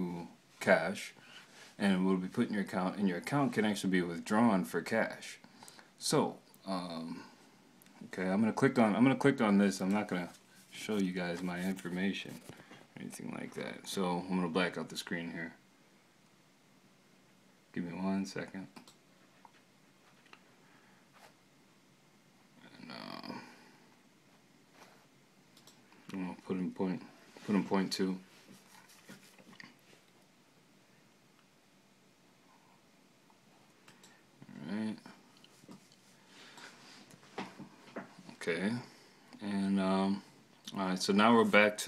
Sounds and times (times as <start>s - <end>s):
Speech: 0.0s - 1.2s, 1.8s - 5.4s, 6.0s - 7.4s, 8.0s - 15.6s, 17.7s - 18.8s, 26.1s - 28.3s, 34.4s - 35.2s, 38.3s - 41.8s.